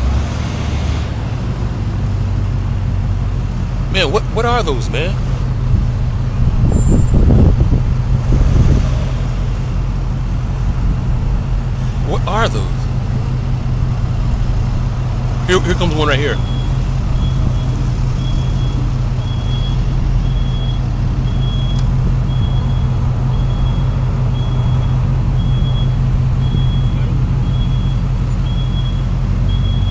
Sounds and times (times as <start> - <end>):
Speech: 3.9 - 5.2, 12.0 - 12.9, 15.4 - 16.4.